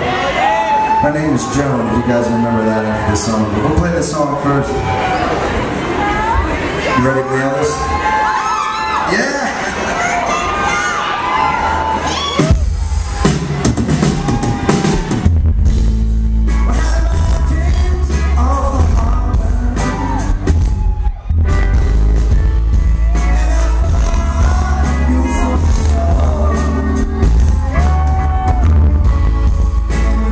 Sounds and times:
Music: 0:12.4 - 0:30.3.

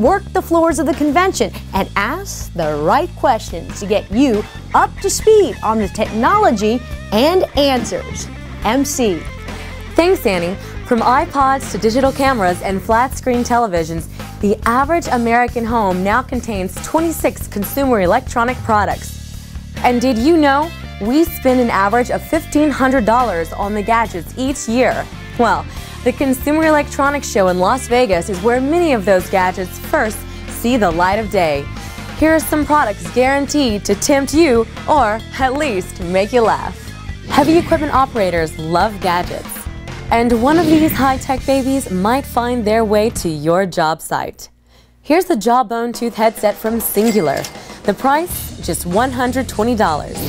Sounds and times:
Speech: 0:00.0 - 0:09.3, 0:10.0 - 0:19.2, 0:19.8 - 0:50.2
Music: 0:00.0 - 0:50.2.

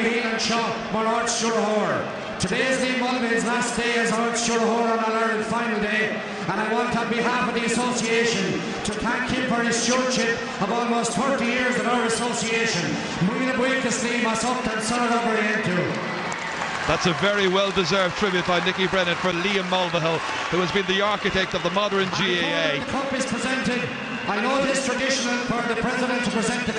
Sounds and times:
Male speech, man speaking: 0:00.0 - 0:16.0, 0:16.9 - 0:26.7
Narration, monologue: 0:00.0 - 0:16.1
Conversation: 0:00.2 - 0:15.8, 0:16.5 - 0:26.7.

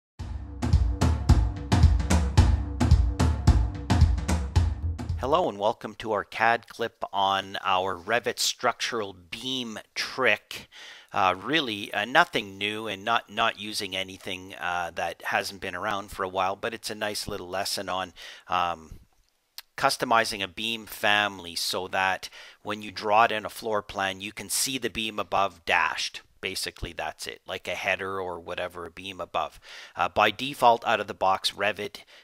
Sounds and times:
Music: 0:00.2 - 0:05.2
Inside, small room: 0:01.3 - 0:32.2
Speech: 0:05.2 - 0:19.0, 0:19.6 - 0:32.1.

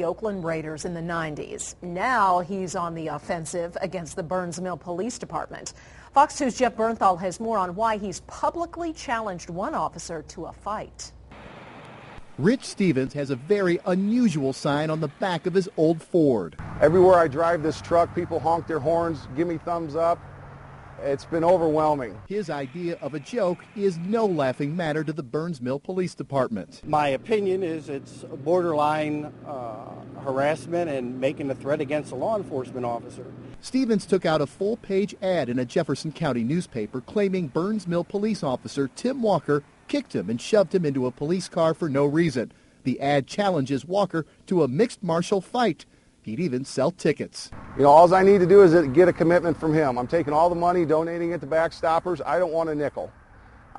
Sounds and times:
Speech: 0:00.0 - 0:11.2, 0:12.4 - 0:20.2, 0:21.0 - 0:53.1
Vehicle: 0:11.3 - 0:25.1, 0:26.8 - 0:41.6, 0:47.5 - 0:53.7.

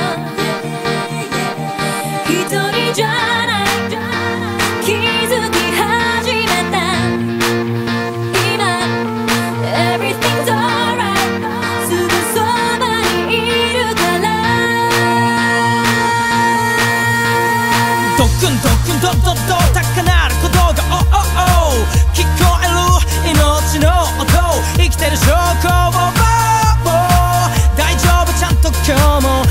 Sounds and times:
Music: 0:00.0 - 0:29.5.

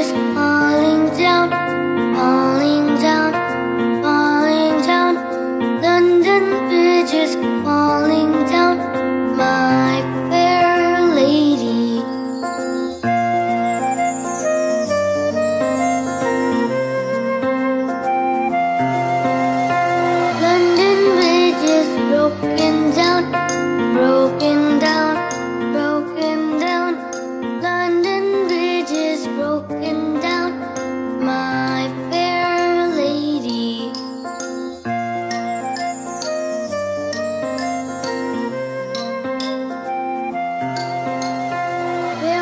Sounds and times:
Music: 0:00.0 - 0:42.4.

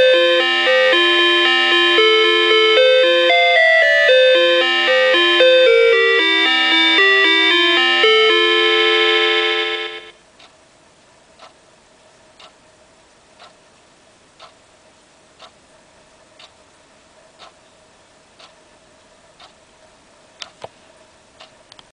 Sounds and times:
Tick-tock: 0:11.4 - 0:11.6, 0:12.4 - 0:12.6, 0:13.4 - 0:13.6, 0:14.4 - 0:14.6, 0:16.4 - 0:16.6, 0:17.4 - 0:17.6, 0:18.4 - 0:18.6, 0:19.4 - 0:19.6, 0:21.4 - 0:21.9
Tick: 0:12.4 - 0:12.6, 0:21.4 - 0:21.9.

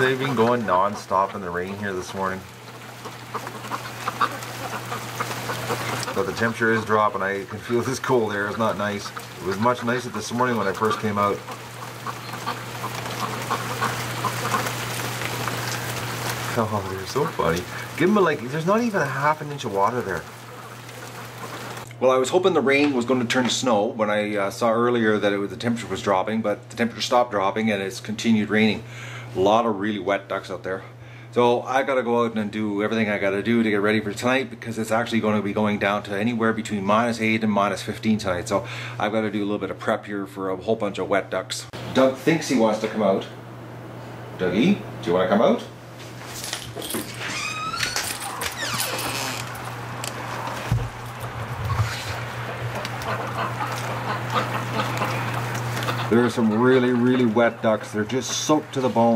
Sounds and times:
Speech: 0:00.0 - 0:02.5, 0:06.1 - 0:11.5, 0:16.5 - 0:20.3, 0:22.0 - 0:43.4, 0:44.4 - 0:45.8, 0:56.1 - 0:59.1
Duck: 0:00.0 - 0:21.9, 0:51.7 - 0:59.1
Bird: 0:00.1 - 0:16.4.

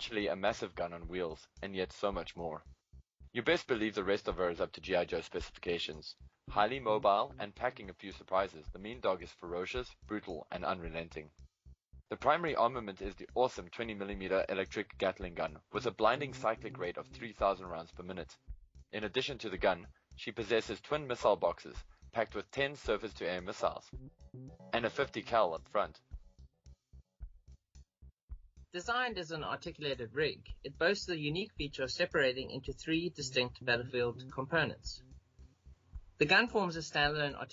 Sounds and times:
Speech: 0:00.0 - 0:02.6, 0:03.4 - 0:11.3, 0:12.1 - 0:18.4, 0:19.0 - 0:24.0, 0:24.7 - 0:26.0, 0:28.8 - 0:35.0, 0:36.2 - 0:37.5.

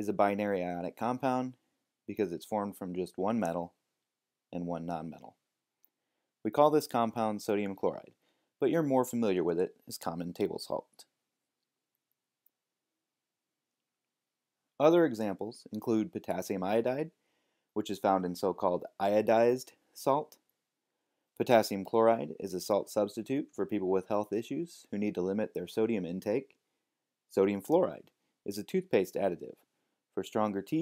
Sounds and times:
Speech: 0:00.0 - 0:03.8, 0:04.5 - 0:05.4, 0:06.5 - 0:11.2, 0:14.8 - 0:17.2, 0:17.8 - 0:20.4, 0:21.4 - 0:26.6, 0:27.3 - 0:30.8.

